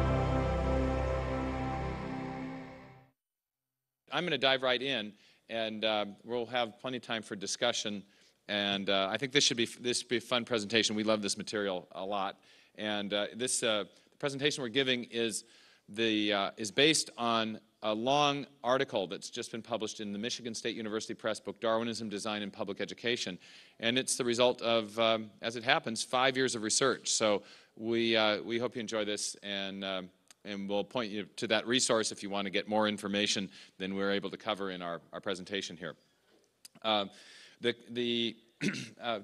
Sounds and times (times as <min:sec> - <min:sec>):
Speech: 0:04.1 - 0:36.0, 0:36.7 - 0:39.2.